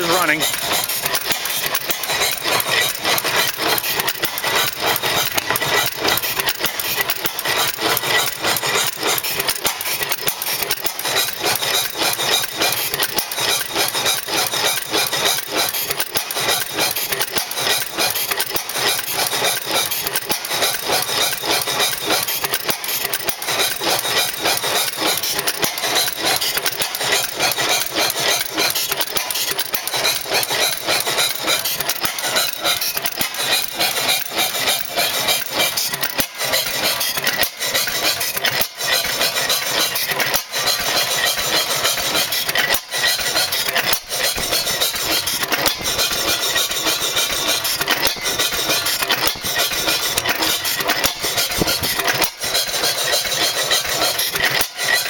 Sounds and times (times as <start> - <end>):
Engine: 0.0 - 55.1.